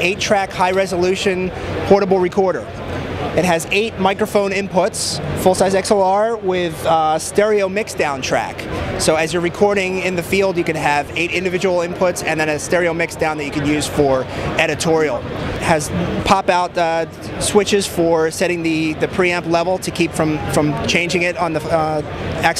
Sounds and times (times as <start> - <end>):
Speech: 0.0 - 2.7, 3.3 - 22.5.